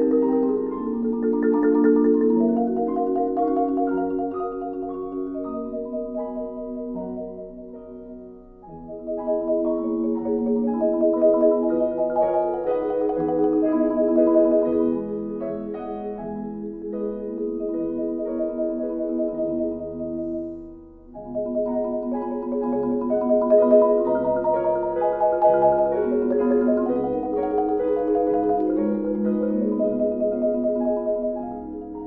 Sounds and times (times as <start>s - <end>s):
Glockenspiel: 0.0s - 32.0s
Marimba, xylophone: 0.0s - 32.0s.